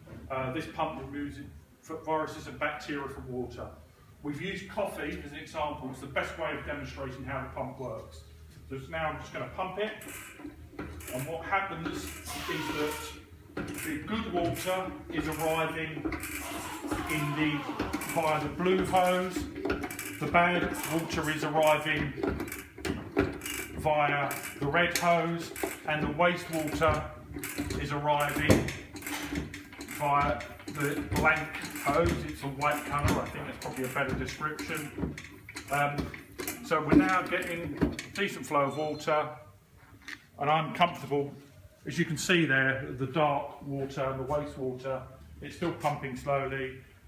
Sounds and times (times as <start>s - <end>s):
Speech: 0.3s - 10.1s, 11.1s - 16.1s, 17.0s - 19.5s, 20.2s - 22.2s, 23.8s - 27.2s, 27.8s - 28.8s, 29.9s - 35.0s, 35.7s - 39.5s, 40.4s - 46.8s.